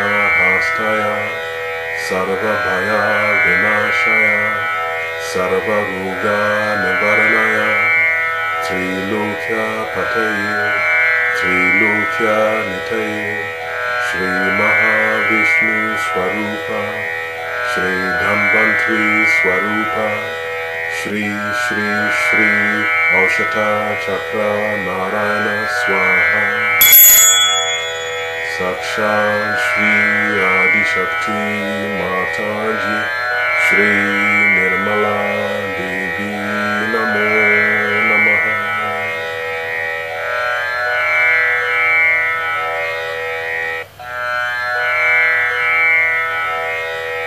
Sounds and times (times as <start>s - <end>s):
Mantra: 0.0s - 26.8s, 27.9s - 39.3s.